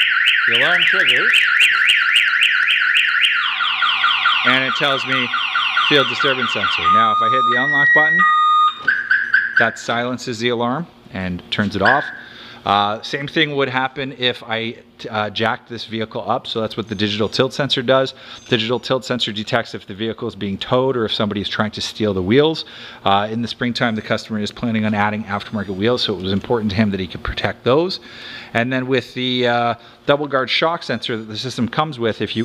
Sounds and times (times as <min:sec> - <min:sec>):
Car alarm: 0:00.0 - 0:09.9, 0:11.8 - 0:12.4.